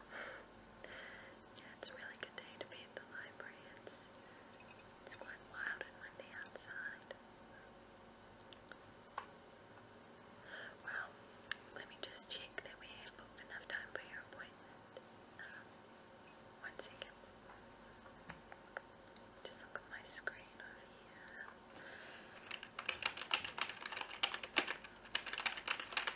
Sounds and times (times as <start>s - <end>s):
Whispering: 1.6s - 4.1s, 5.1s - 7.2s, 10.8s - 11.1s, 11.7s - 14.6s, 15.4s - 15.7s, 16.6s - 17.2s, 19.4s - 21.6s.